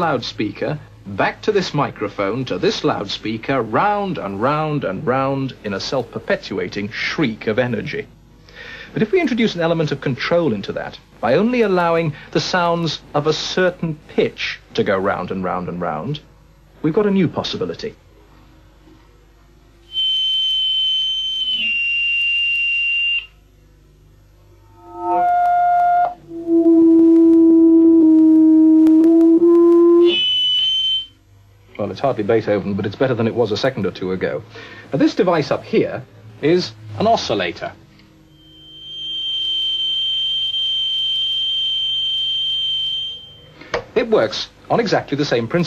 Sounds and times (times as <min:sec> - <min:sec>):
Speech: 0:00.0 - 0:08.2, 0:08.9 - 0:18.1, 0:31.7 - 0:37.8, 0:44.0 - 0:45.6
Buzzer: 0:19.9 - 0:23.4, 0:28.3 - 0:31.2, 0:38.3 - 0:43.6
Smoke detector, smoke alarm: 0:19.9 - 0:23.4, 0:29.9 - 0:31.2, 0:38.3 - 0:43.6.